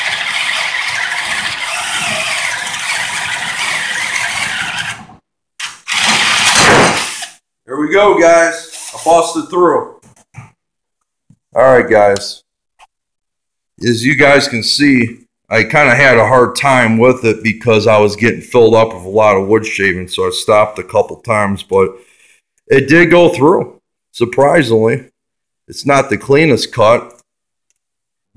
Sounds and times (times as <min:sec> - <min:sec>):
Drill: 0:00.0 - 0:07.4
Speech: 0:07.7 - 0:10.0, 0:11.6 - 0:12.5, 0:13.8 - 0:22.0, 0:22.7 - 0:27.2.